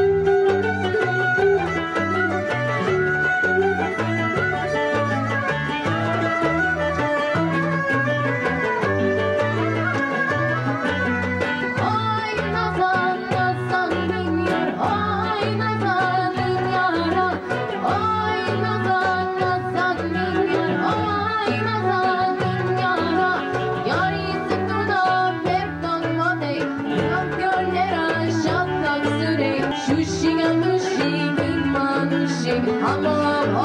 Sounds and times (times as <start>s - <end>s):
Music: 0.0s - 33.6s.